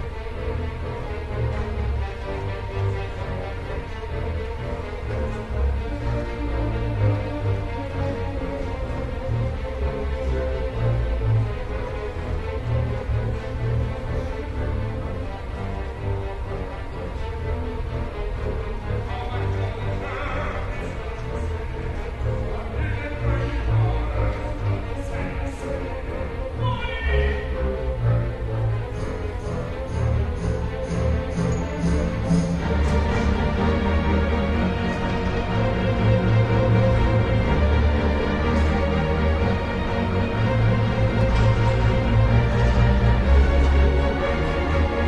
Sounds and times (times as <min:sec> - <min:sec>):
Music: 0:00.0 - 0:45.0.